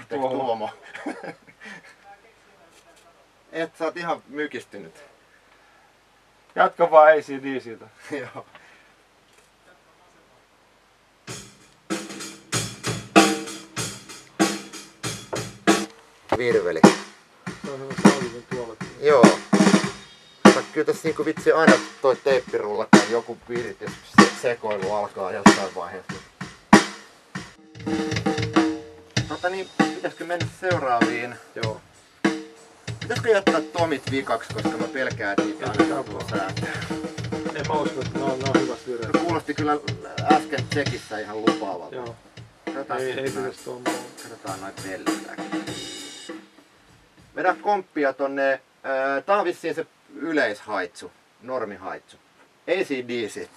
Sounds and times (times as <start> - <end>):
Speech: 0.0 - 0.8, 2.0 - 5.2, 6.6 - 8.5, 16.3 - 17.0, 17.6 - 19.4, 20.5 - 26.2, 29.3 - 31.8, 33.0 - 45.6, 47.4 - 53.5
Drum kit: 11.2 - 47.7
Drum: 11.3 - 47.6.